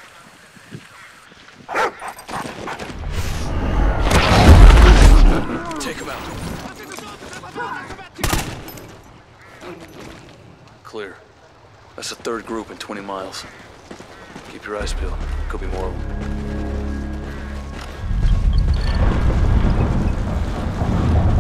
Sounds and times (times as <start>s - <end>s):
Speech: 14.5s - 16.0s.